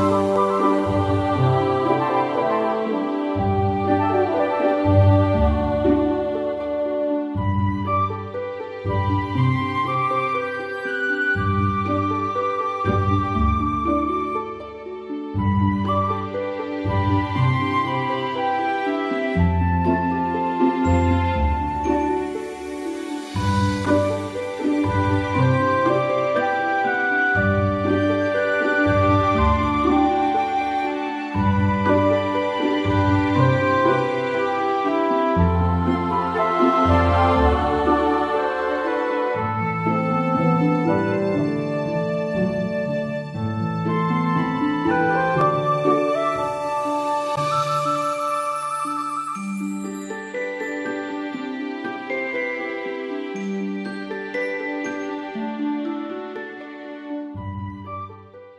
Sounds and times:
Soul music: 0:00.0 - 0:58.5.

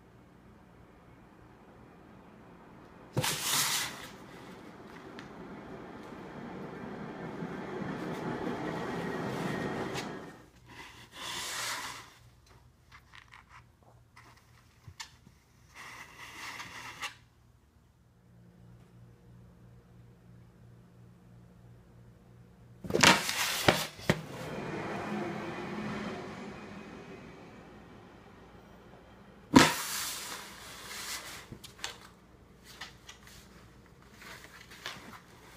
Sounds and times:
Inside, small room: 0:00.0 - 0:35.5.

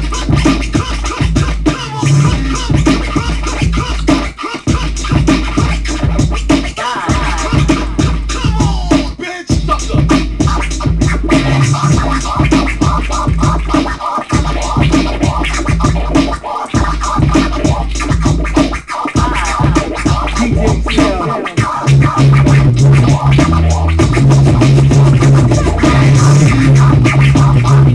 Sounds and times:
Scratching (performance technique): 0:00.0 - 0:27.9.

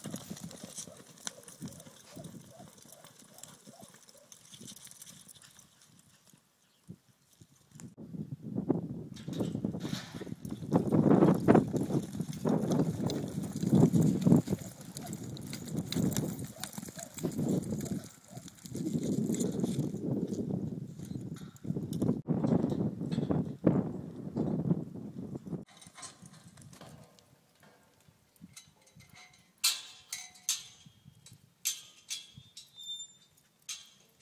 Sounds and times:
Clip-clop: 0:00.0 - 0:08.0, 0:09.2 - 0:24.6, 0:25.3 - 0:34.2.

